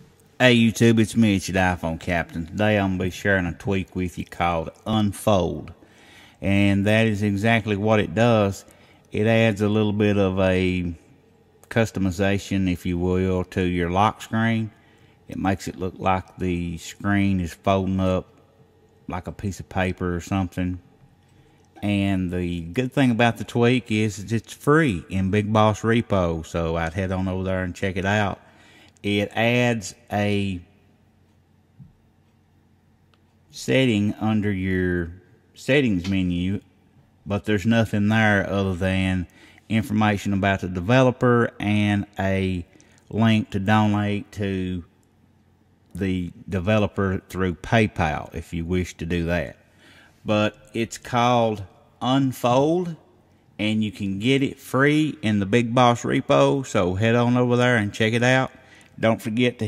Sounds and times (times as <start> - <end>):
Speech: 0.4 - 5.8, 6.4 - 11.1, 11.7 - 18.3, 19.1 - 20.9, 21.8 - 28.4, 29.0 - 30.8, 33.5 - 36.7, 37.3 - 45.0, 46.0 - 49.6, 50.2 - 59.6.